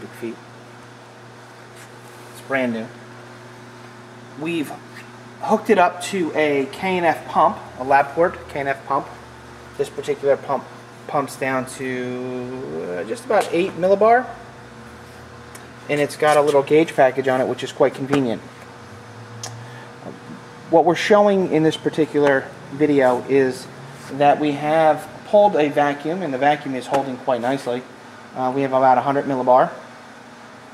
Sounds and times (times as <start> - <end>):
Speech: 0.0 - 0.4, 2.4 - 3.0, 4.4 - 9.2, 9.8 - 14.4, 15.9 - 18.5, 20.7 - 29.8.